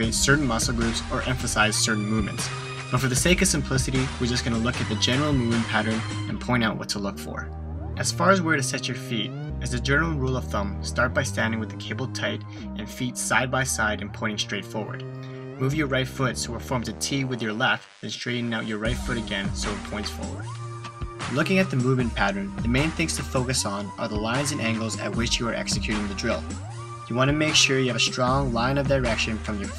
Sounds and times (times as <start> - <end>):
Speech: 0.0 - 20.4, 21.3 - 29.7
Music: 0.0 - 29.7.